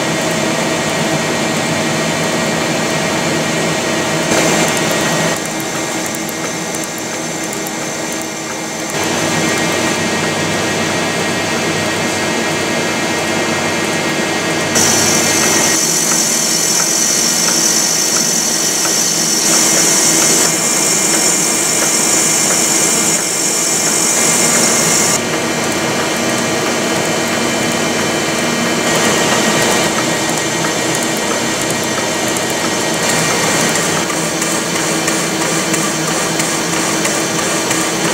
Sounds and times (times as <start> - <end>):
Heavy engine (low frequency): 0.0 - 38.1.